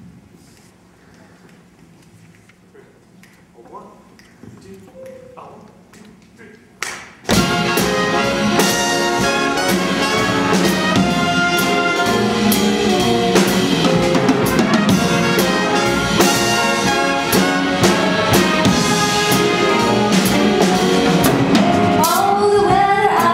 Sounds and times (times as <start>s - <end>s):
Jazz: 7.2s - 23.3s.